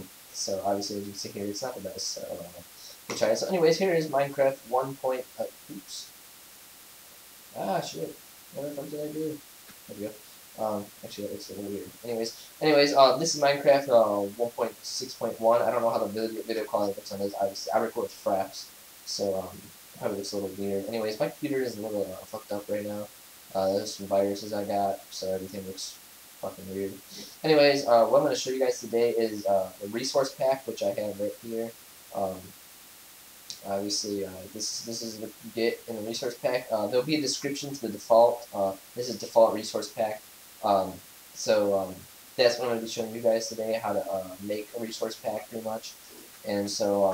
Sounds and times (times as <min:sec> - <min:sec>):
Speech: 0:00.0 - 0:06.1, 0:07.6 - 0:32.6, 0:33.5 - 0:47.1.